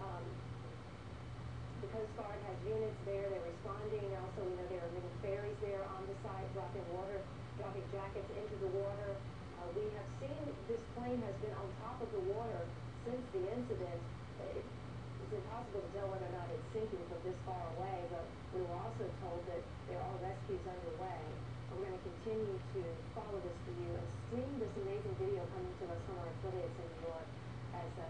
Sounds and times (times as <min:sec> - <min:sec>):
Speech: 0:00.0 - 0:00.4, 0:01.8 - 0:28.1.